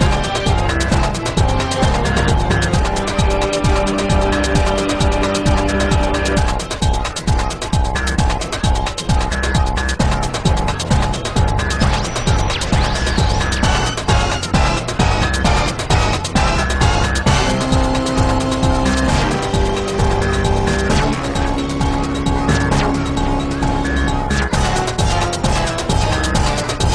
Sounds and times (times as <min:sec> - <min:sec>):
Video game music: 0:00.0 - 0:26.9.